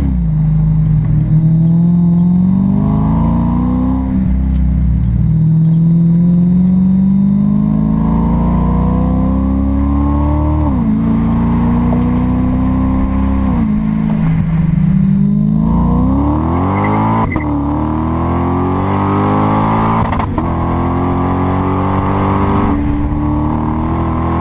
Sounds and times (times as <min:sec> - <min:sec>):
Vehicle: 0:00.0 - 0:24.4
Accelerating, revving, vroom: 0:01.4 - 0:04.3, 0:05.3 - 0:14.2, 0:15.0 - 0:24.4.